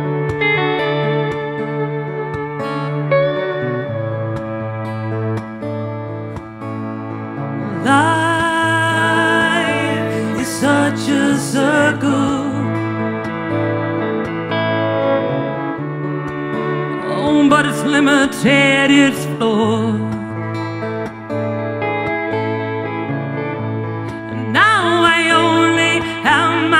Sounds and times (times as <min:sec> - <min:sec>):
Music: 0:00.0 - 0:26.7
Singing: 0:07.8 - 0:12.7.